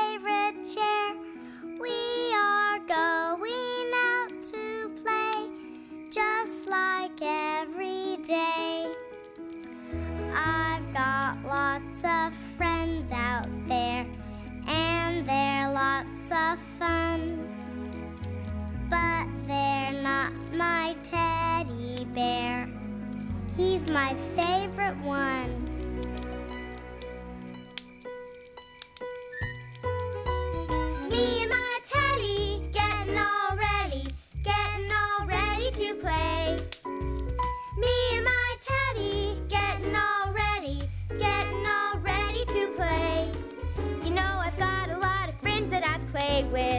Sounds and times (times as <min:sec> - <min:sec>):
Child speech, kid speaking: 0:23.6 - 0:25.6.